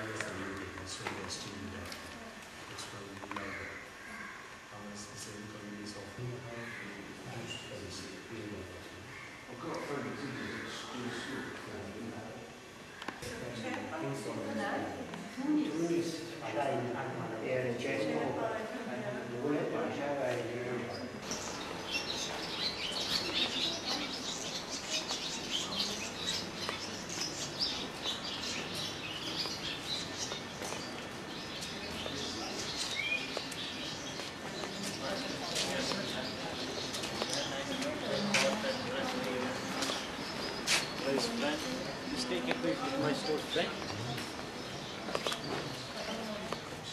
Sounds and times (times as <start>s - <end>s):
Chirp, tweet: 20.9s - 46.9s.